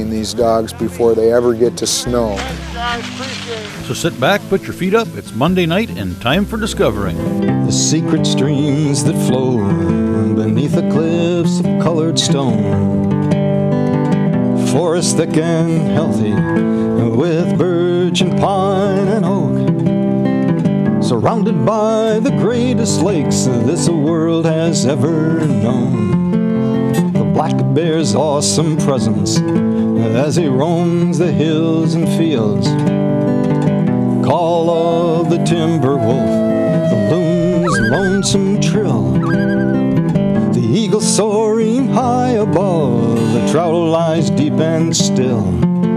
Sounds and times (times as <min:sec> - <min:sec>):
Speech: 0:00.0 - 0:07.9
Music: 0:00.0 - 0:45.9.